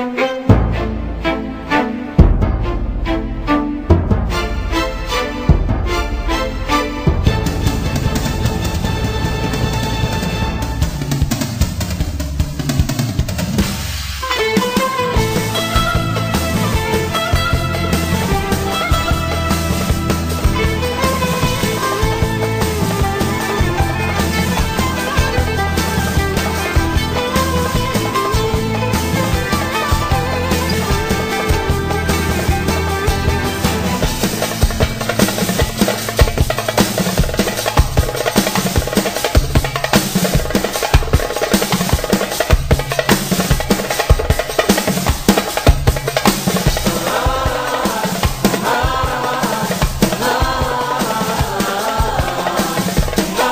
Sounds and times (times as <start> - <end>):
Music: 0.0 - 53.5.